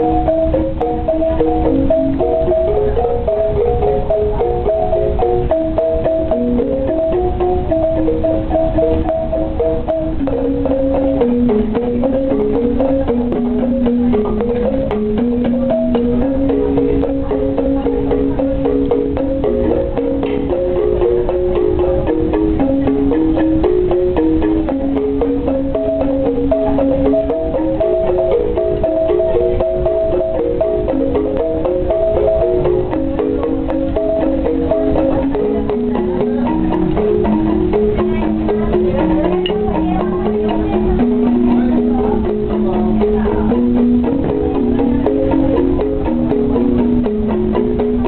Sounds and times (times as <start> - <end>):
Traditional music: 0.0 - 48.0.